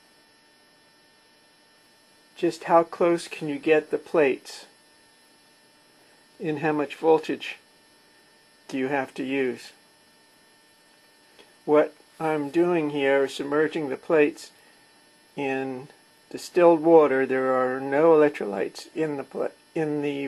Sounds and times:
Speech: 2.4s - 4.8s, 6.4s - 7.6s, 8.7s - 9.8s, 11.7s - 14.6s, 15.4s - 20.2s.

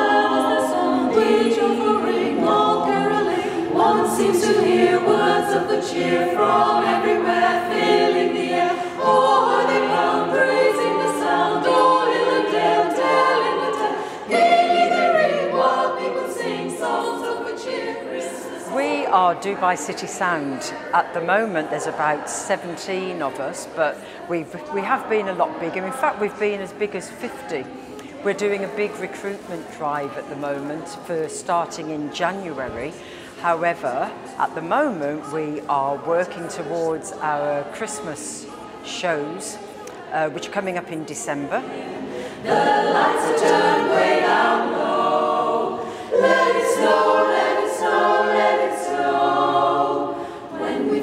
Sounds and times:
Choir: 0.0s - 27.7s, 28.3s - 51.0s
Speech: 18.7s - 41.9s.

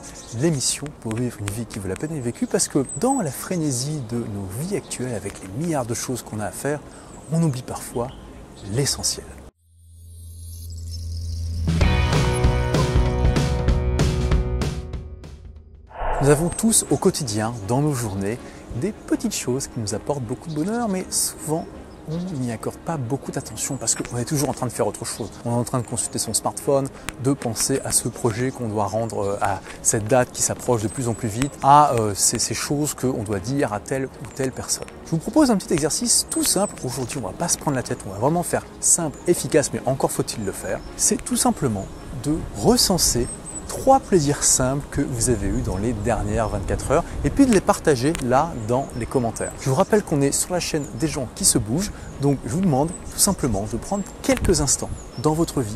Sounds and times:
Speech: 0.3s - 9.4s, 16.0s - 55.7s
Music: 11.4s - 22.8s.

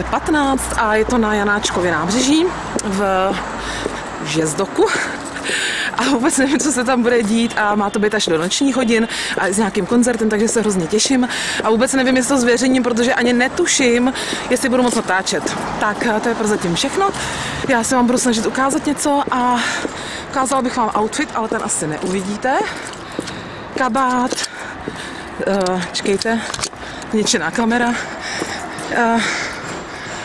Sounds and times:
Speech: 0.0s - 3.4s, 4.2s - 5.2s, 6.0s - 19.8s, 20.4s - 22.8s, 23.8s - 24.4s, 25.4s - 26.5s, 27.1s - 28.0s, 28.9s - 29.4s.

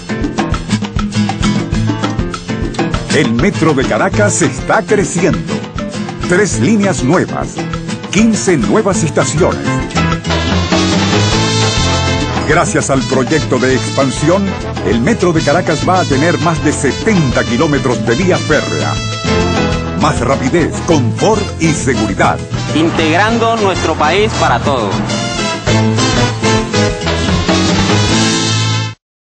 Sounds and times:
Music: 0.0s - 29.0s
Speech: 3.1s - 5.4s, 6.3s - 9.7s, 12.5s - 19.0s, 20.0s - 25.0s.

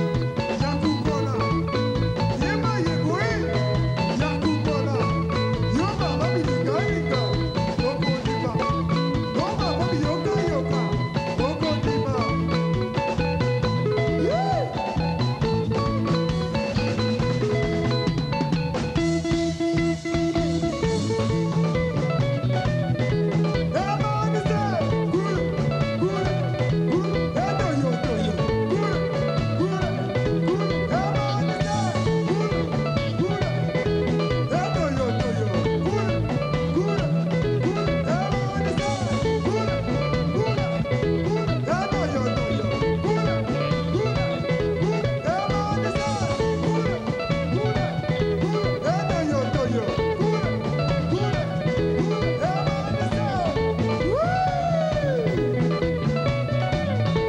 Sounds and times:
Rock and roll: 0.0s - 57.2s
Singing: 23.7s - 55.4s.

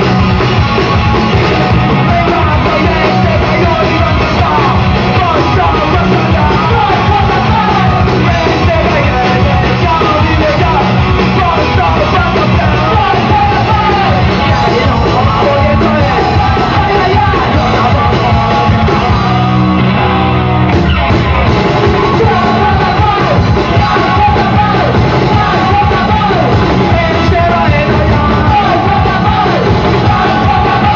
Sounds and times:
Music: 0.0s - 30.9s.

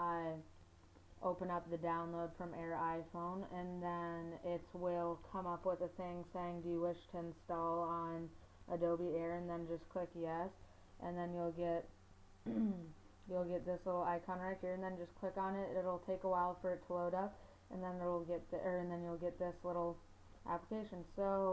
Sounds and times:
Speech: 0.0s - 0.5s, 1.2s - 11.9s, 12.5s - 21.5s.

